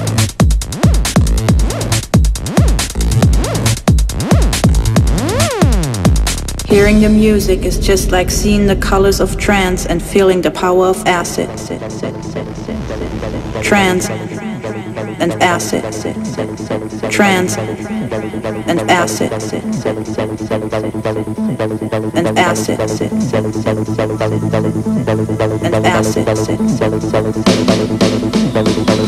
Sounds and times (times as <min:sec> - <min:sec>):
Music: 0:00.0 - 0:29.0
Speech: 0:06.6 - 0:23.6, 0:25.6 - 0:26.9.